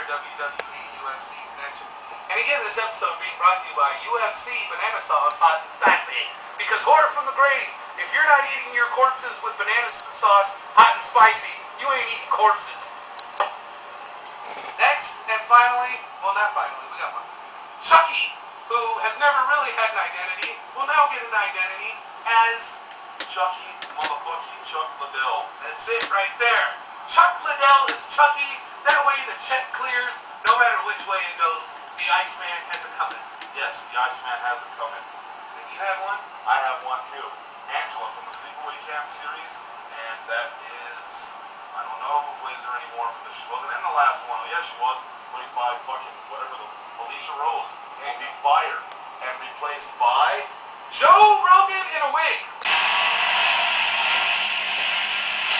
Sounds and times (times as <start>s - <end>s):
Speech: 0.0s - 13.0s, 14.8s - 52.6s.